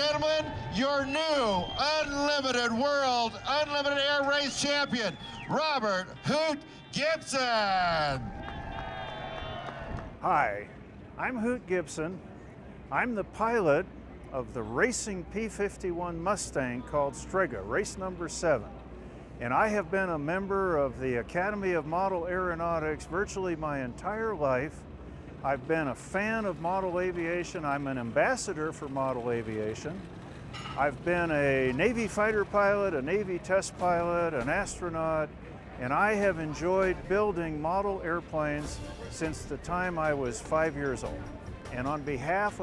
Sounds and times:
Speech: 0.0s - 8.2s, 10.2s - 12.2s, 12.9s - 24.8s, 25.4s - 30.0s, 30.8s - 42.6s.

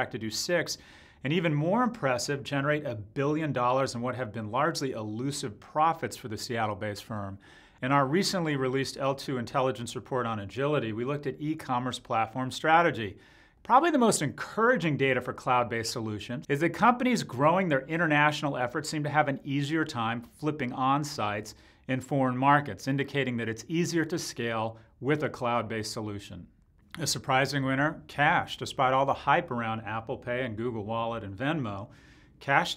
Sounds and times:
Speech: 0.0s - 32.7s.

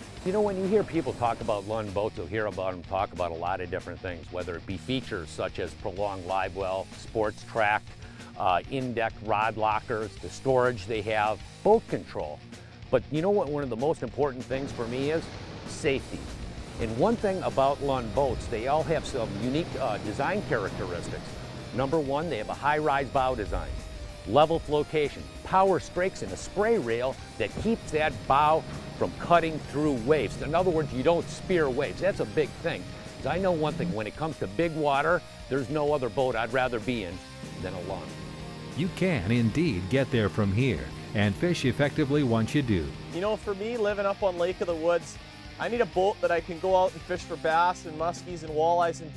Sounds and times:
Music: 0.0s - 49.1s
Speech: 0.3s - 7.8s, 8.4s - 16.2s, 16.8s - 21.2s, 21.8s - 23.7s, 24.3s - 38.1s, 38.8s - 49.1s.

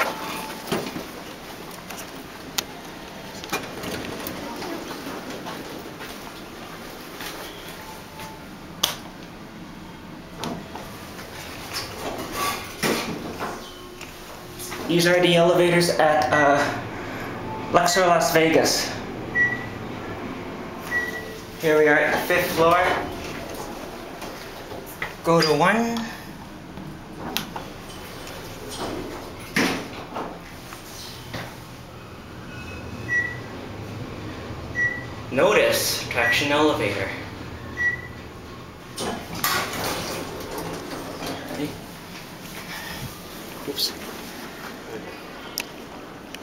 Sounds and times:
Speech: 14.9s - 16.8s, 17.7s - 19.0s, 21.6s - 23.1s, 25.2s - 26.2s, 35.3s - 37.3s.

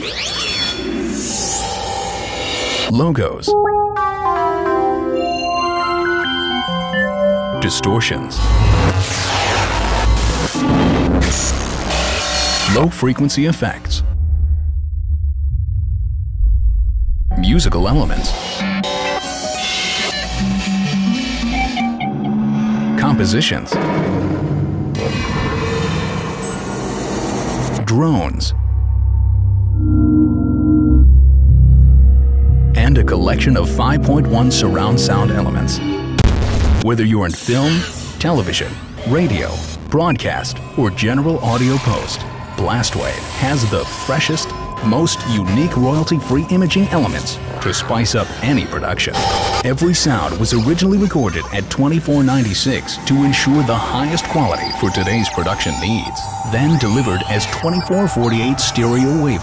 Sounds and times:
Sound effect: 0.0s - 2.9s, 8.4s - 27.9s, 29.2s - 59.4s.

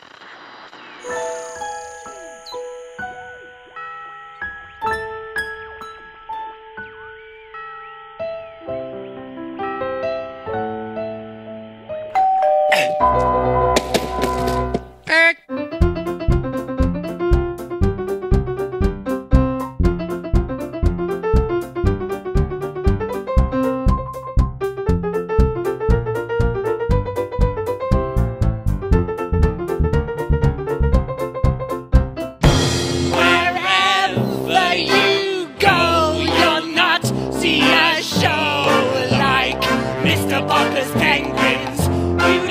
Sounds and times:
Music: 0.4s - 12.3s, 13.0s - 42.5s.

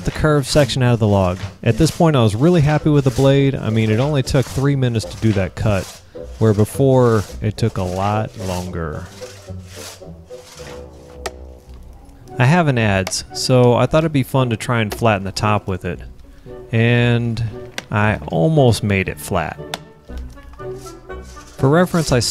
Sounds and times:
Sawing: 0.0s - 11.4s, 20.6s - 22.3s
Wood: 0.0s - 14.2s, 14.8s - 15.6s, 19.6s - 22.3s.

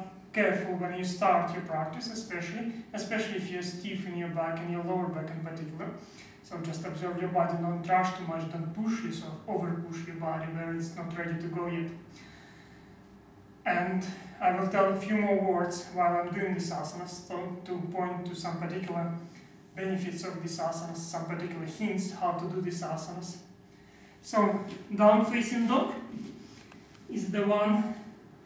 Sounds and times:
Speech: 0.0s - 12.0s, 13.6s - 23.5s, 24.2s - 26.4s, 27.1s - 28.1s.

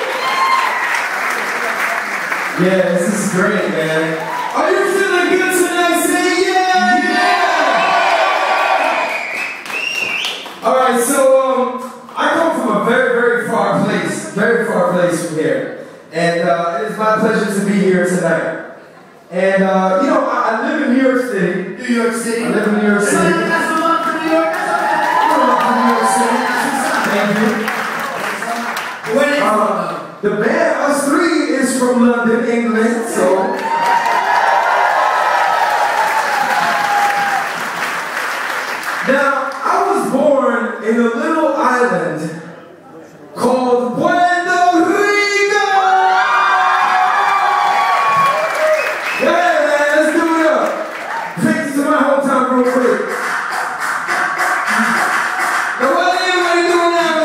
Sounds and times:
Speech: 2.6s - 7.7s, 10.6s - 33.6s, 39.0s - 46.3s, 49.2s - 50.8s, 51.4s - 53.1s, 55.8s - 57.2s.

